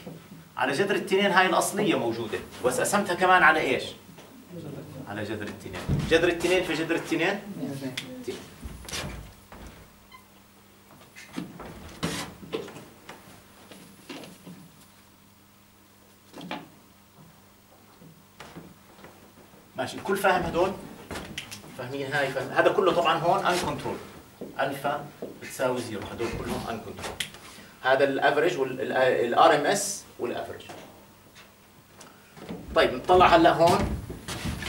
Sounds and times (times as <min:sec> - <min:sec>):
Speech: 0:19.8 - 0:20.8, 0:21.8 - 0:27.1, 0:27.8 - 0:31.0, 0:32.7 - 0:33.9.